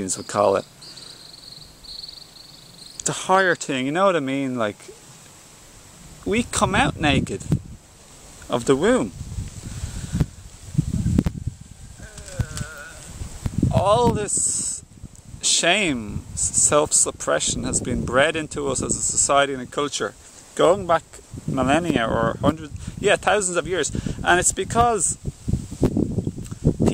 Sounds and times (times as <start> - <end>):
Speech: 0.0 - 0.7, 3.0 - 5.0, 6.2 - 7.5, 8.5 - 9.2, 13.7 - 14.8, 15.4 - 25.2.